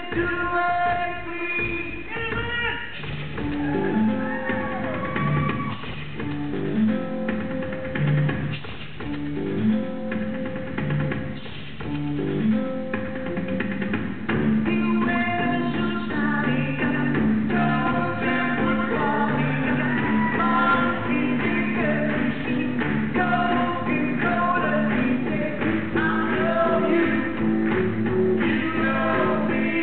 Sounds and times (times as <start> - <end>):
Music: 0.0 - 29.8.